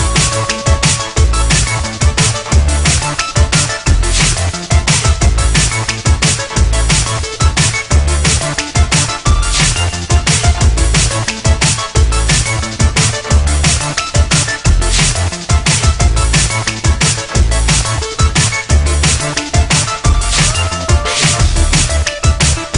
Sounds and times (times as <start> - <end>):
Drum and bass: 0.0 - 22.7.